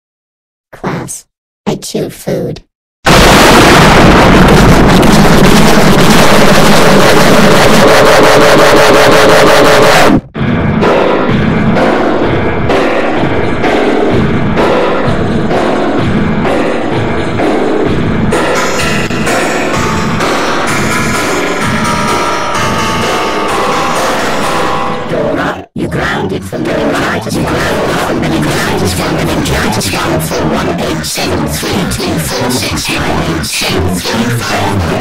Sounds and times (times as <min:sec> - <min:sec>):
Speech: 0:00.7 - 0:02.7, 0:25.1 - 0:35.0
Eruption: 0:03.1 - 0:08.2.